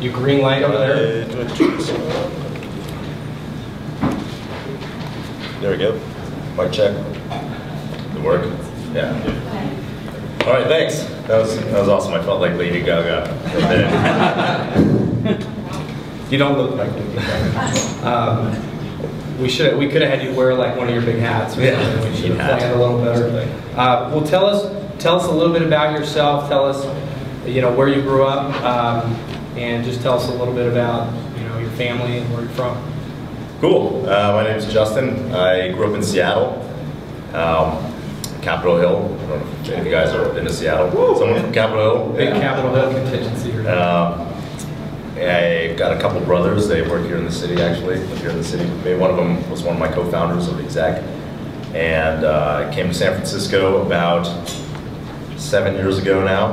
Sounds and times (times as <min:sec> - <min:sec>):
Speech: 0:00.0 - 0:02.5, 0:05.6 - 0:07.3, 0:10.4 - 0:14.0, 0:16.3 - 0:18.7, 0:19.4 - 0:32.9, 0:33.6 - 0:36.7, 0:37.3 - 0:44.4, 0:45.2 - 0:51.1, 0:51.7 - 0:54.5, 0:55.4 - 0:56.5.